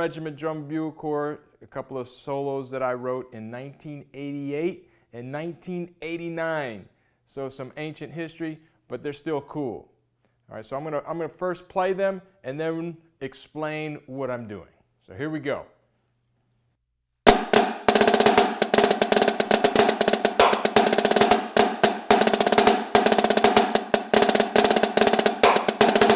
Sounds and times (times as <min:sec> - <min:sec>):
Bass drum: 0:17.3 - 0:26.1
Drum roll: 0:17.3 - 0:26.1.